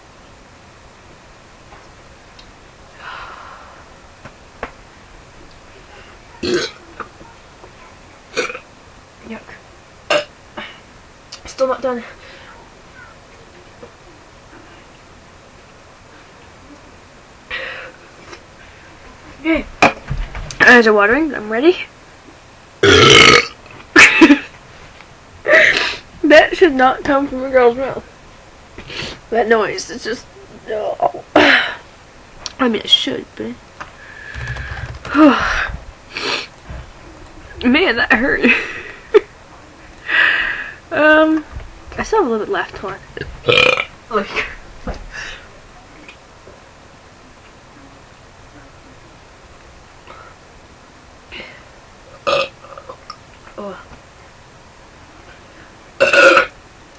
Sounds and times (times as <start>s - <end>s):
Burping, eructation: 6.4s - 6.8s, 8.4s - 8.6s, 22.8s - 23.6s, 43.5s - 43.9s, 52.2s - 53.0s, 56.0s - 56.6s
Speech: 26.3s - 28.1s.